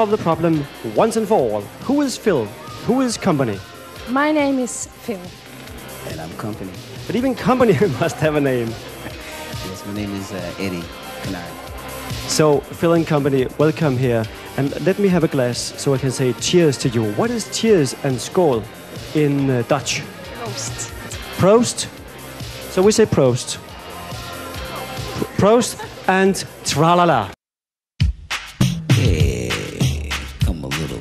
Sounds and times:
Music: 0.0 - 27.4, 28.0 - 31.0
Speech: 9.6 - 11.6, 12.3 - 18.6, 19.2 - 21.9, 25.2 - 27.4, 29.3 - 31.0.

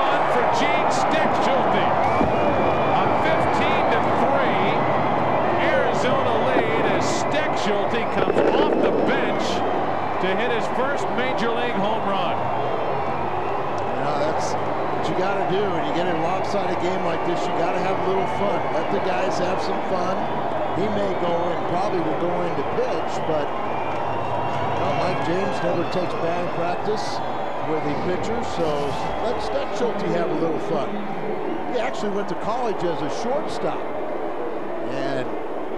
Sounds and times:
Speech: 0.0 - 2.0, 3.0 - 4.8, 5.6 - 9.6, 10.2 - 12.4, 14.0 - 23.5, 24.8 - 31.0, 31.7 - 33.8, 34.9 - 35.3.

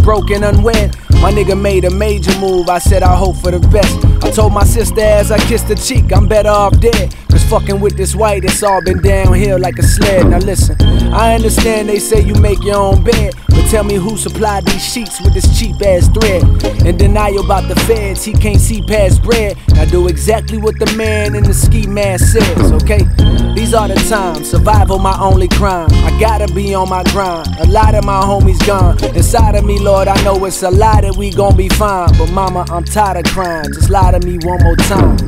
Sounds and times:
Hip hop music: 0.0 - 35.2.

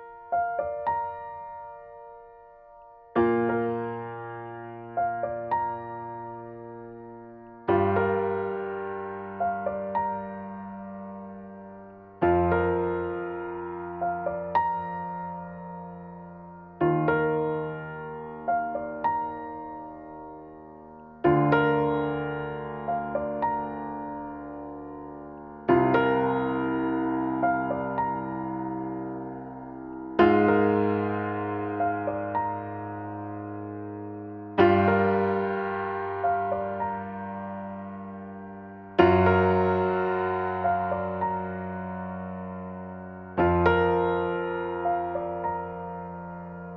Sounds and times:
Music: 0.0 - 46.7.

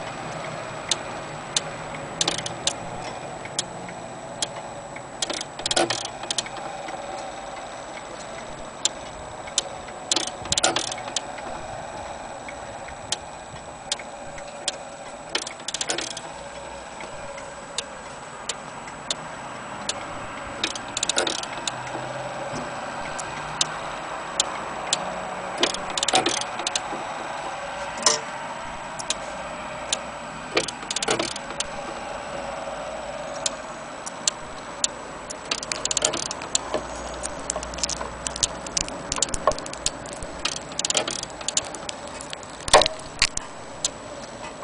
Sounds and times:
Tick-tock: 0.0 - 11.7, 12.5 - 29.3, 29.9 - 32.0, 33.3 - 44.0.

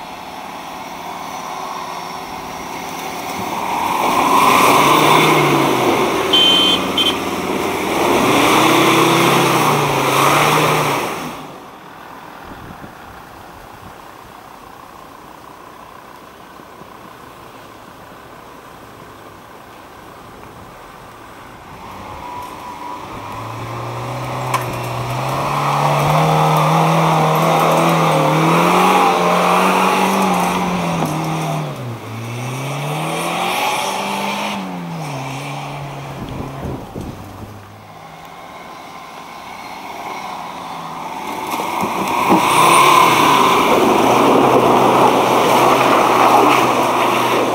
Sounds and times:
Car: 0.0 - 47.5.

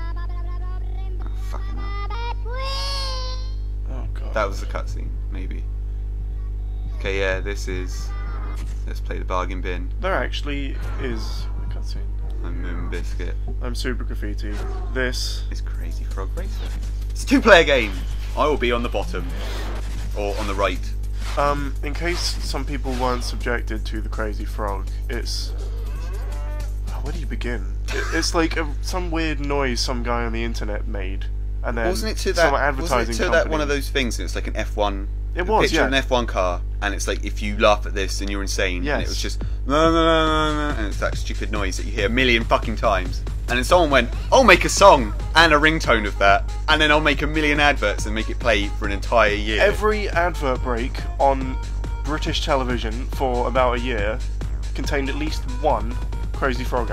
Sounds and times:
Speech: 1.1 - 1.9, 3.9 - 5.6, 6.9 - 8.1, 8.9 - 19.5, 20.2 - 25.5, 26.9 - 54.2, 54.8 - 56.9.

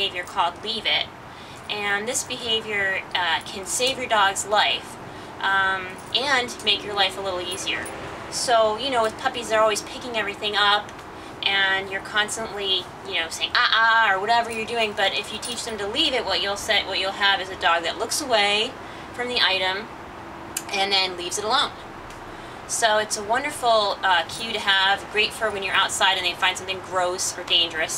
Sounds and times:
Speech: 0.0 - 1.1, 1.7 - 19.9, 20.6 - 21.8, 22.7 - 27.9.

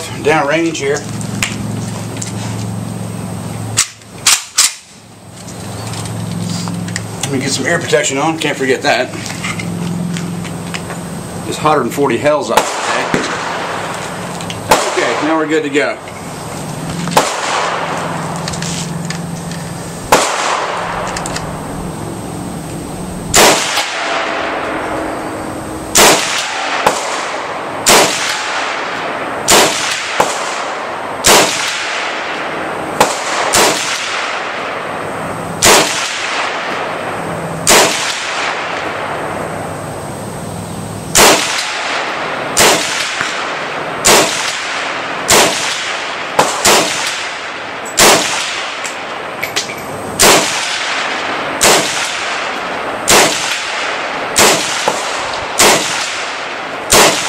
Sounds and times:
Speech: 0.0 - 1.1, 7.3 - 9.2, 11.5 - 13.2, 15.0 - 16.0
Outside, rural or natural: 0.0 - 57.2.

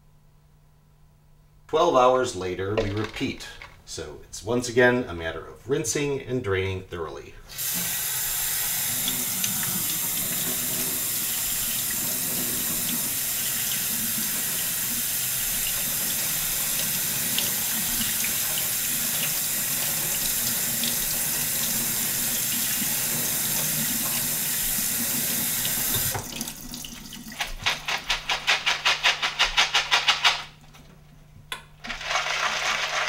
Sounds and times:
Water tap, faucet: 7.5 - 27.6
Sink (filling or washing): 7.5 - 28.7, 31.9 - 33.0.

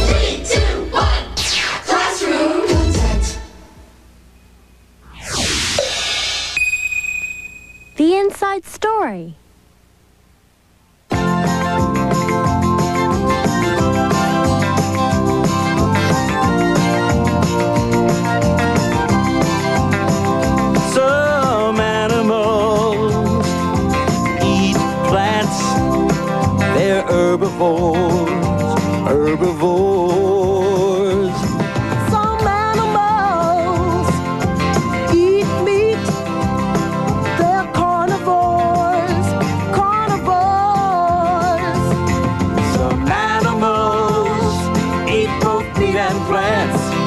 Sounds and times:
Music: 0.0 - 3.8, 11.1 - 47.0
Speech: 8.0 - 9.4.

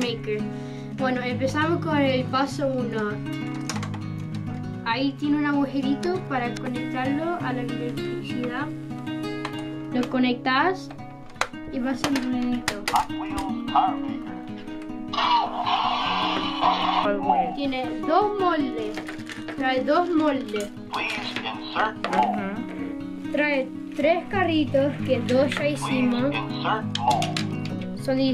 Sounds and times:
Music: 0.0 - 28.3
Speech: 21.0 - 22.6.

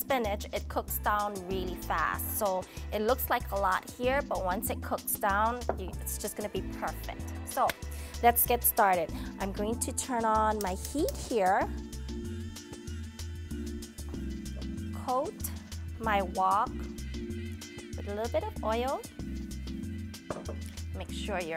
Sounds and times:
Speech: 0.0 - 11.7, 15.0 - 16.8, 18.0 - 19.1, 21.0 - 21.5
Music: 0.0 - 21.5.

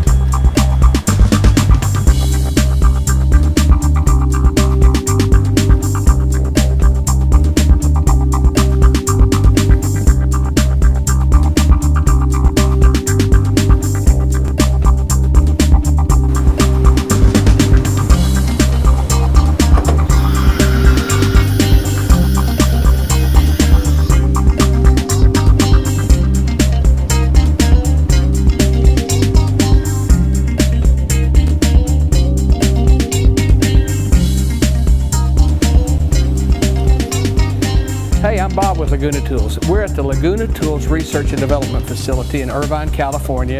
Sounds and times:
Music: 0.0 - 43.5.

